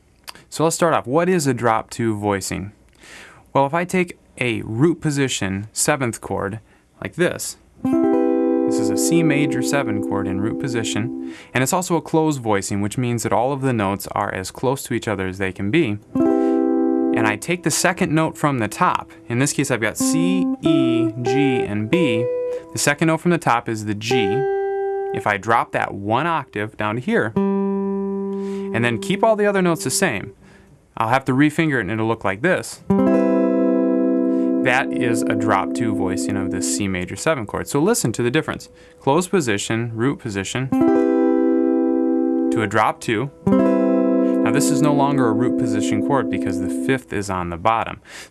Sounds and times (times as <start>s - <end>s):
Speech: 0.3s - 2.8s, 3.5s - 7.6s, 8.7s - 16.1s, 17.2s - 24.5s, 25.2s - 27.4s, 28.7s - 30.4s, 31.0s - 32.9s, 34.6s - 40.8s, 42.5s - 43.3s, 44.4s - 48.0s
Electric guitar: 7.8s - 11.4s, 16.1s - 17.2s, 24.2s - 25.2s, 32.9s - 36.8s, 40.8s - 42.5s, 43.4s - 46.8s
Strum: 7.8s - 11.5s, 16.0s - 30.6s, 32.9s - 37.9s, 40.8s - 47.1s.